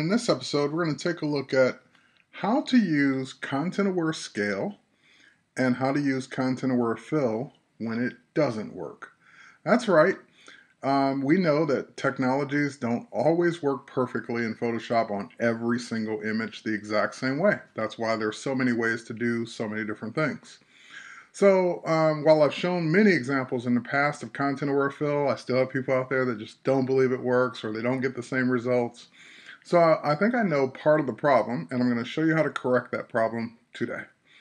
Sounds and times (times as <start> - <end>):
Speech: 0.0 - 1.8, 2.4 - 4.8, 5.6 - 34.1.